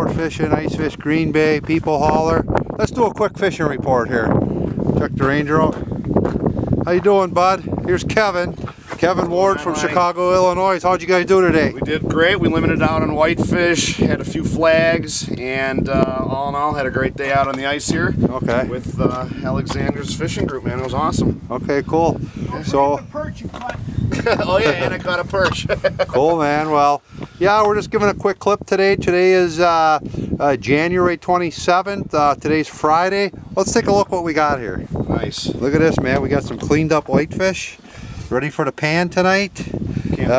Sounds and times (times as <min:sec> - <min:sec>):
Speech: 0:00.0 - 0:04.3, 0:05.0 - 0:05.8, 0:06.9 - 0:40.3.